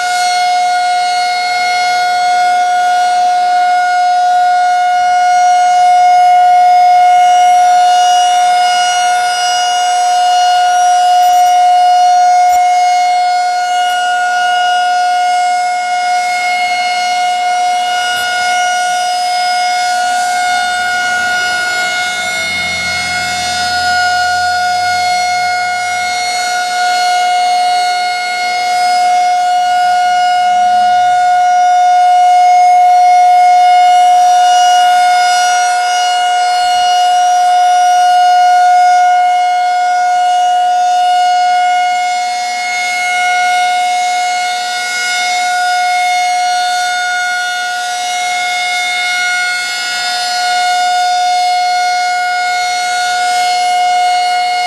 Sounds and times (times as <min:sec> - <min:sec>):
Civil defense siren: 0:00.0 - 0:54.6.